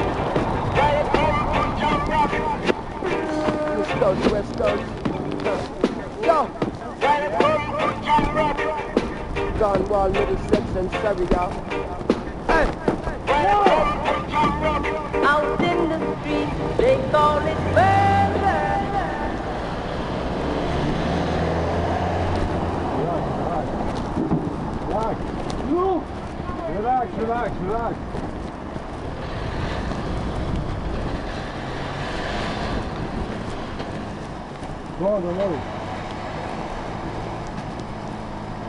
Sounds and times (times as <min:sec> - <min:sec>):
Car: 0:00.0 - 0:38.6
Bicycle: 0:17.1 - 0:38.6.